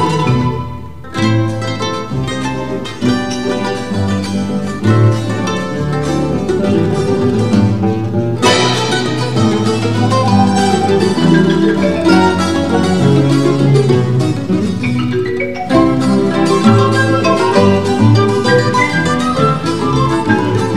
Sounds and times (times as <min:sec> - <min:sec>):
Flamenco: 0:00.0 - 0:20.7
Guitar: 0:00.0 - 0:20.7.